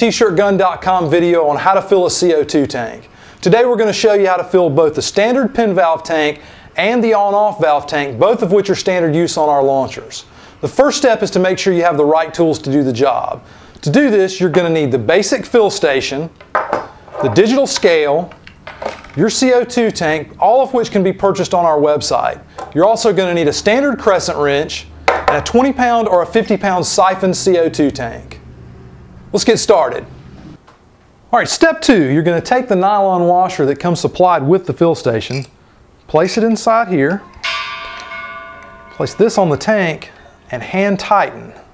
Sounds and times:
Speech: 0:00.0 - 0:16.3, 0:17.2 - 0:18.3, 0:19.2 - 0:28.4, 0:29.3 - 0:30.1, 0:31.3 - 0:35.5, 0:36.1 - 0:37.3, 0:39.0 - 0:41.6.

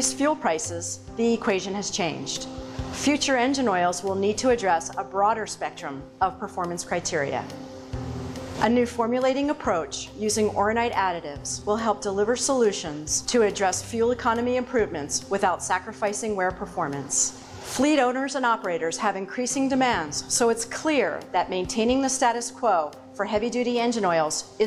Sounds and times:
Speech: 0:00.0 - 0:07.5, 0:08.6 - 0:24.6.

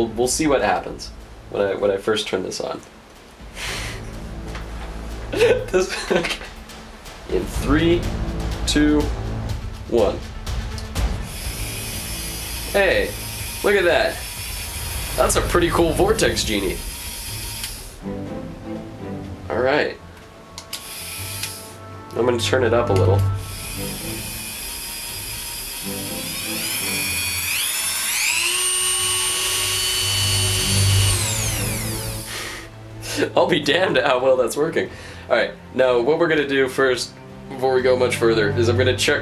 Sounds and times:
Speech: 0:00.0 - 0:02.9, 0:05.4 - 0:06.3, 0:07.3 - 0:09.1, 0:09.9 - 0:10.2, 0:12.7 - 0:14.2, 0:15.2 - 0:16.8, 0:19.5 - 0:20.0, 0:22.2 - 0:23.2, 0:33.2 - 0:39.2
Music: 0:00.0 - 0:39.2.

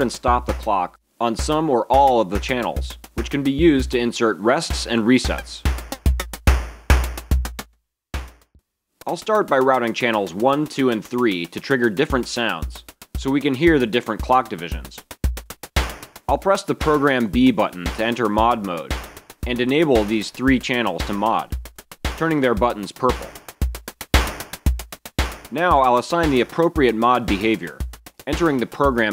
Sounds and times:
Speech: 0:00.0 - 0:05.7, 0:09.0 - 0:15.0, 0:16.3 - 0:18.9, 0:19.5 - 0:21.5, 0:22.2 - 0:23.4, 0:25.5 - 0:29.1
Music: 0:00.0 - 0:29.1.

